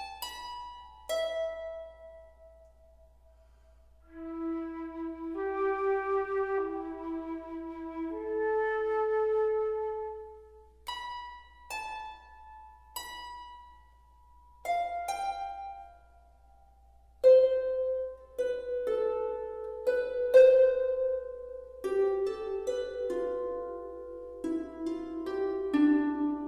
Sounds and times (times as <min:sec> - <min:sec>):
New-age music: 0:00.0 - 0:26.4
Flute: 0:04.1 - 0:10.8.